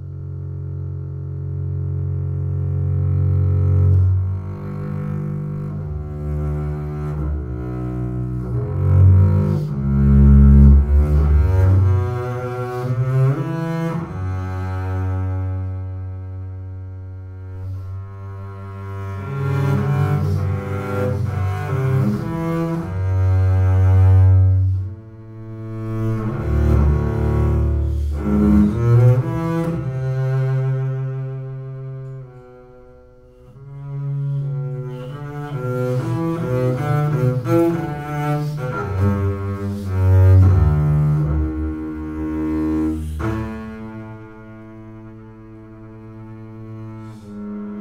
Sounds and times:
Double bass: 0.0 - 47.8.

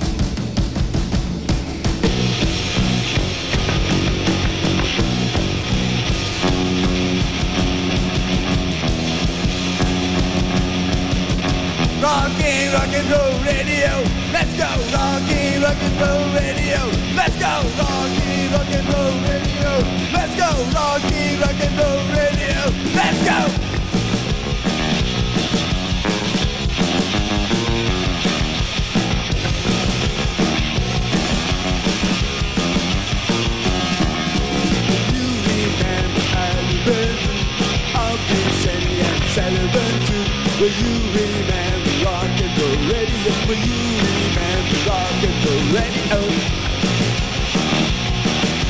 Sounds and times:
Rock and roll: 0.0 - 48.7.

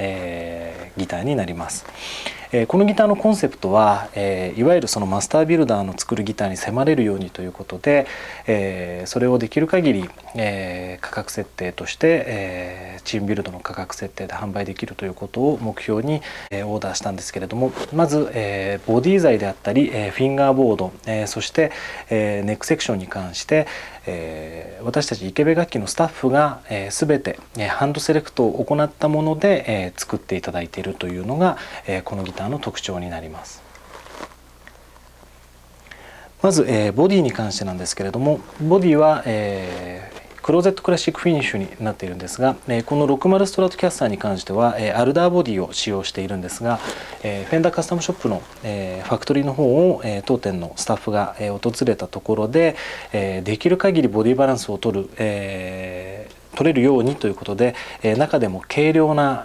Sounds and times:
Speech: 0.0 - 1.9, 2.5 - 33.6, 36.4 - 59.4.

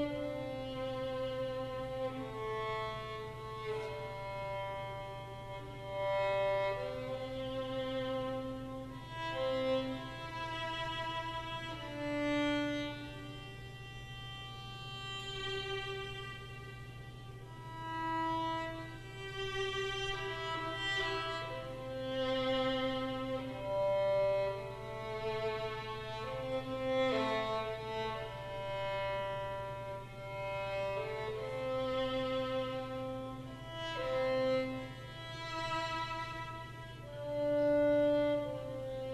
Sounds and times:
Violin, fiddle: 0.0 - 39.1.

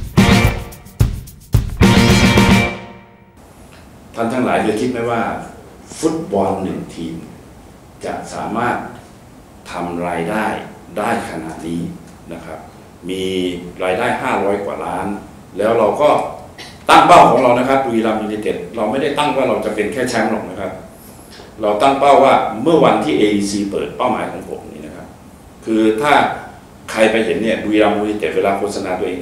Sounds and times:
Speech: 4.2 - 7.4, 8.0 - 20.9, 21.6 - 29.2.

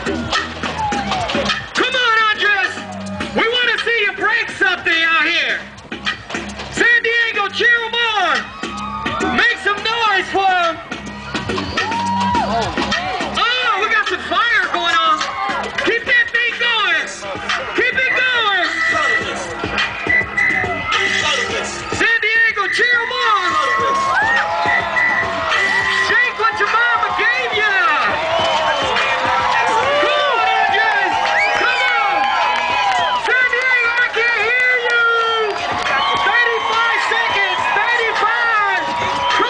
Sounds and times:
Music: 0.0 - 39.5
Speech: 1.8 - 2.8, 3.4 - 5.7, 6.8 - 8.4, 9.4 - 10.8, 13.4 - 15.3, 15.9 - 17.2, 17.8 - 19.2, 26.1 - 28.1, 33.3 - 35.5, 36.2 - 38.8.

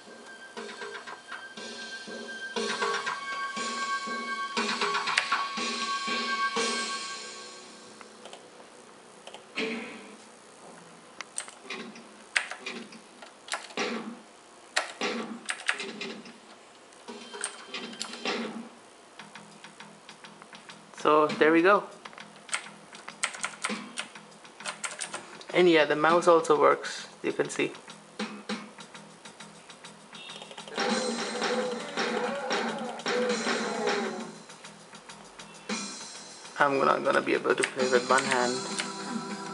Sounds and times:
Typewriter: 14.8 - 16.1, 22.0 - 25.2.

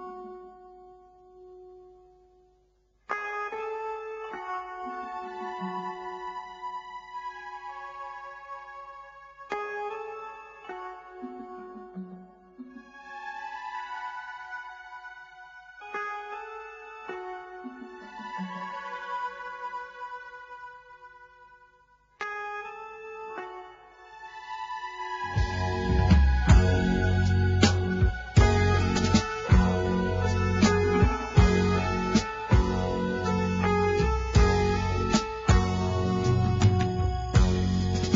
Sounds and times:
Music: 0.0 - 38.1.

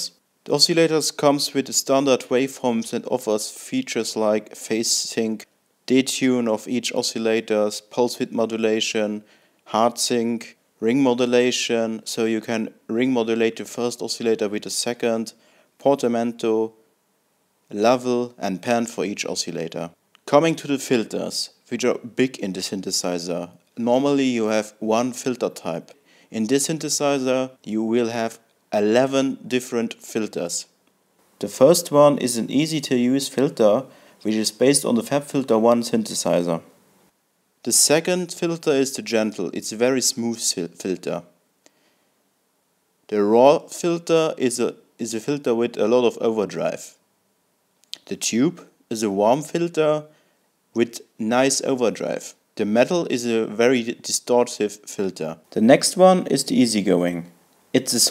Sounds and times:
Speech: 0.0 - 16.8, 17.7 - 30.8, 31.4 - 36.7, 37.6 - 41.3, 43.1 - 47.0, 47.9 - 50.1, 50.8 - 58.1.

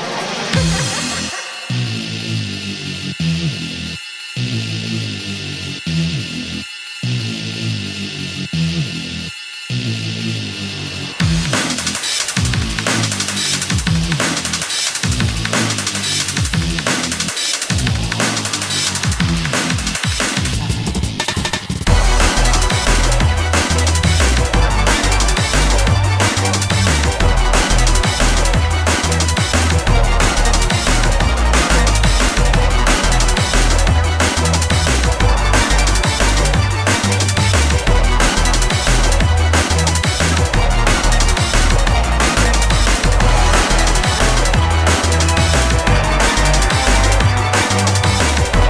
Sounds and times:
Techno: 0.0 - 48.6.

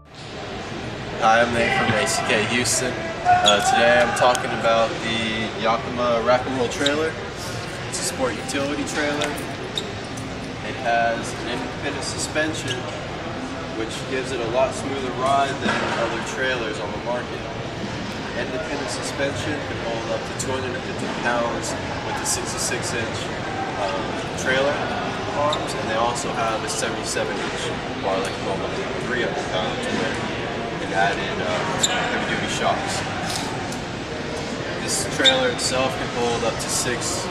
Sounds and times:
Speech: 1.2 - 9.4, 10.6 - 13.0, 13.7 - 17.5, 18.4 - 33.4, 34.8 - 37.3.

